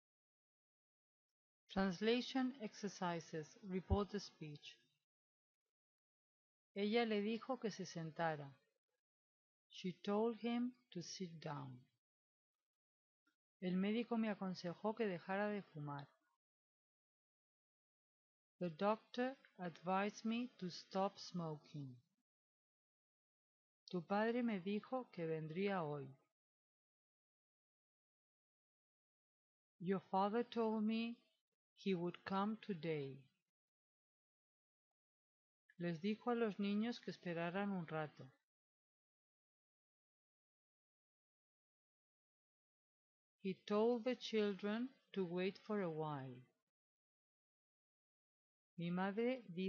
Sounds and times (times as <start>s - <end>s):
Female speech, woman speaking: 1.7s - 4.8s, 6.8s - 8.6s, 9.8s - 11.9s, 13.6s - 16.1s, 18.6s - 22.0s, 23.9s - 26.2s, 29.8s - 31.2s, 31.9s - 33.2s, 35.8s - 38.3s, 43.5s - 46.4s, 48.8s - 49.6s
Narration, monologue: 1.7s - 5.0s, 6.8s - 8.8s, 9.7s - 12.0s, 13.6s - 16.4s, 18.6s - 22.2s, 23.9s - 26.3s, 29.8s - 33.4s, 35.7s - 38.5s, 43.5s - 46.6s, 48.8s - 49.6s.